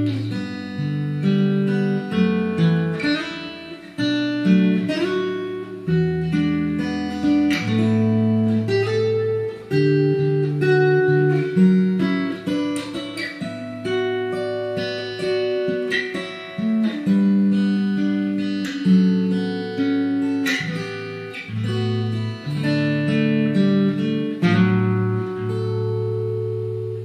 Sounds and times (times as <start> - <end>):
Music: 0.0 - 27.0.